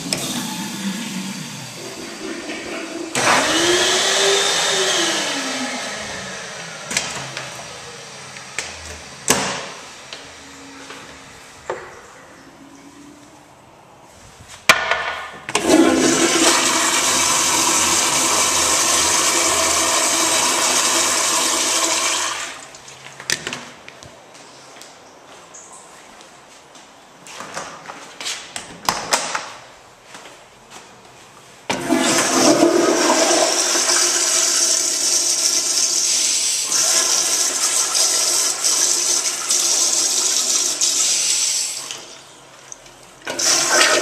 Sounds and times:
Toilet flush: 0.0 - 5.9, 15.6 - 22.9, 31.7 - 42.3, 43.3 - 44.0.

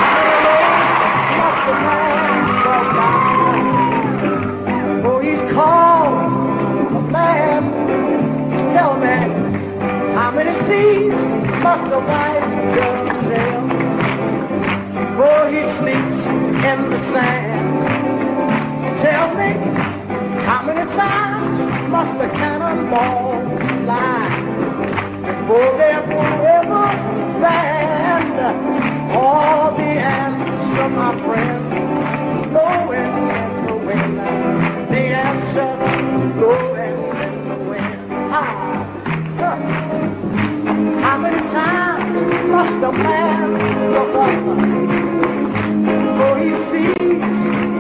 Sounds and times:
Music: 0.0 - 47.8.

